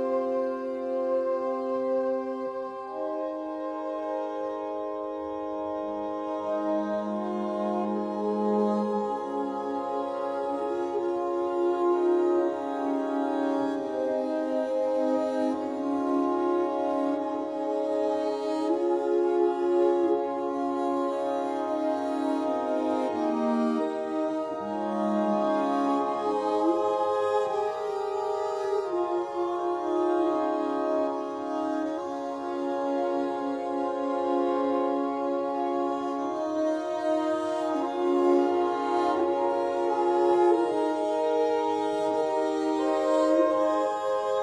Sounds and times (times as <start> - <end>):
Keyboard (musical): 0.0 - 44.4.